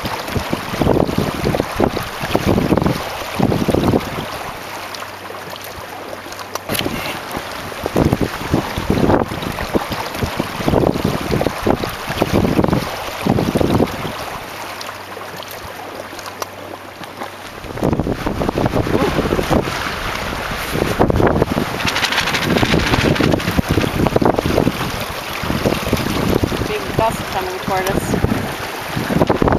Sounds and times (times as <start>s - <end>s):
Wind noise (microphone): 0.0s - 4.5s, 6.7s - 14.4s, 17.6s - 29.5s.